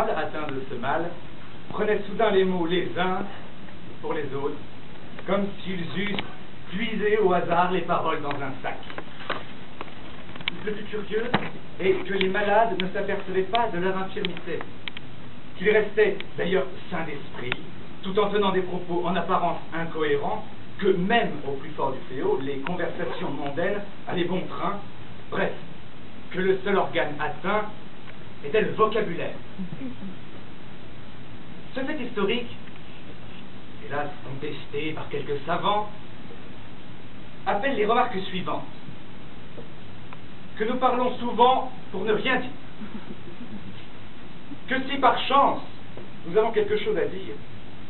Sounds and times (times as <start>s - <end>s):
Speech: 0.0s - 4.6s, 5.2s - 9.0s, 10.5s - 14.7s, 15.6s - 25.6s, 26.3s - 27.8s, 28.4s - 30.2s, 31.7s - 32.6s, 33.8s - 36.0s, 37.4s - 38.8s, 40.6s - 43.2s, 44.6s - 47.4s.